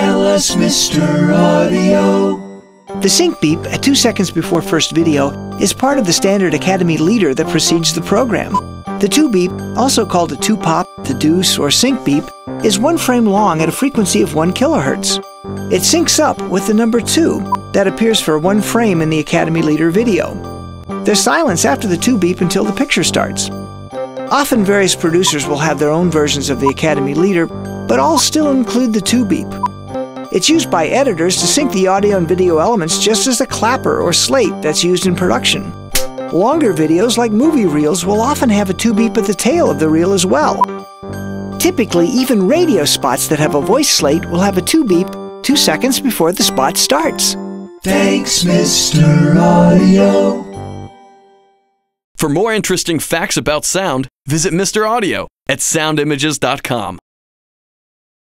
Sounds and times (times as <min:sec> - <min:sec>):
Music: 0:00.0 - 0:52.0
Speech: 0:03.0 - 0:20.4, 0:21.1 - 0:23.6, 0:24.3 - 0:29.6, 0:30.3 - 0:40.7, 0:41.6 - 0:50.4, 0:52.2 - 0:57.0.